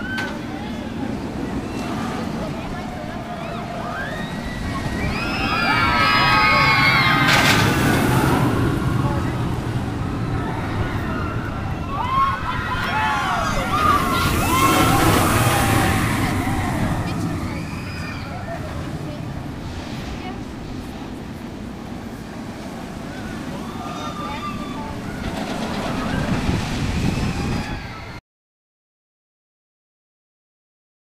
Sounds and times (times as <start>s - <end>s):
Outside, urban or manmade: 0.0s - 28.2s.